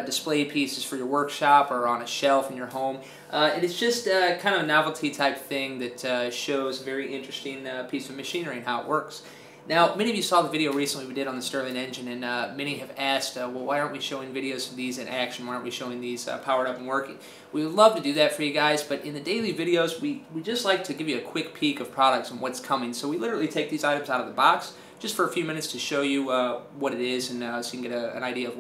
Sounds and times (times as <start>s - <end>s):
Speech: 0.0s - 28.6s.